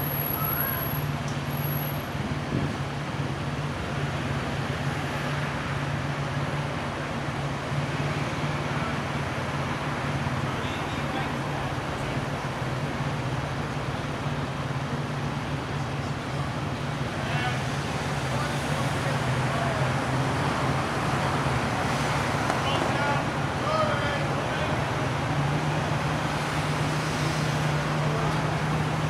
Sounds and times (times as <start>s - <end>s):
Speech: 10.5s - 12.3s, 17.2s - 20.0s, 22.6s - 24.8s.